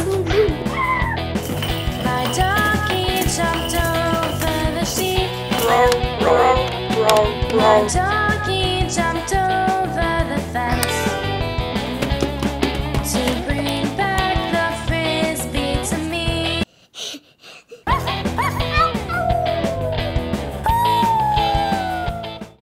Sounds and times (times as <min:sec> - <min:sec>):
Acoustic guitar: 0:00.0 - 0:16.6
Strum: 0:10.7 - 0:15.1.